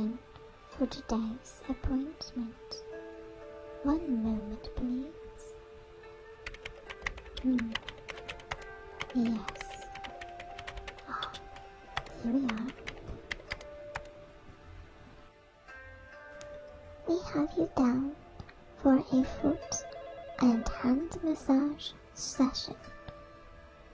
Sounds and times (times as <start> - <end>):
Speech: 0.0 - 0.2, 0.8 - 2.8, 3.8 - 5.5, 7.4 - 7.8, 9.1 - 9.9, 12.2 - 12.8, 17.1 - 18.2, 18.8 - 19.8, 20.4 - 22.8
Music: 0.0 - 23.9.